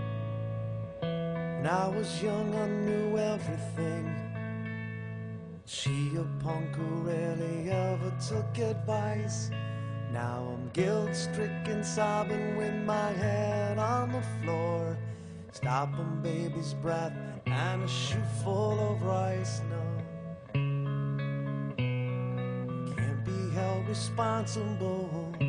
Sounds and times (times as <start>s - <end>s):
Music: 0.0s - 25.4s.